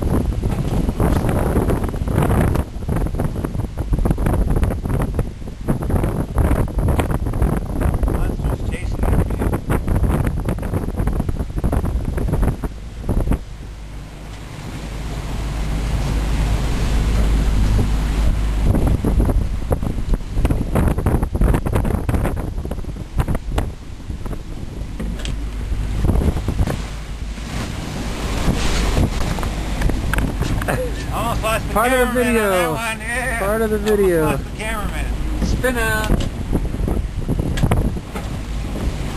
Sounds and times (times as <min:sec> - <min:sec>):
Sailboat, sailing ship: 0:00.0 - 0:39.1.